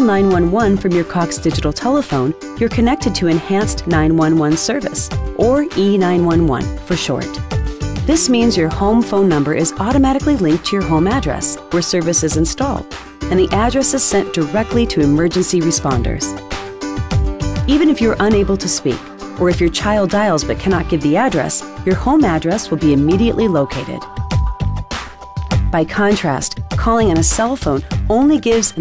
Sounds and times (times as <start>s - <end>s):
Speech: 0.0s - 7.4s, 8.1s - 16.4s, 17.7s - 24.0s, 25.8s - 28.8s
Music: 0.0s - 28.8s.